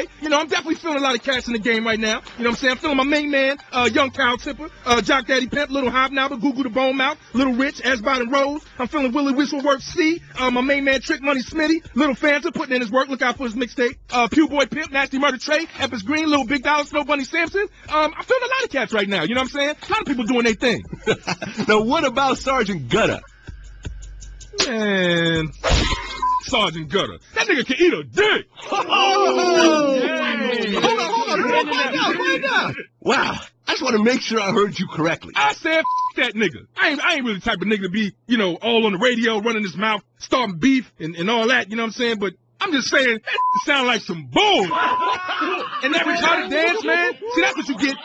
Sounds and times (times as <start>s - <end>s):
Speech: 0.0s - 20.9s, 21.6s - 23.3s, 24.6s - 25.6s, 26.4s - 48.0s.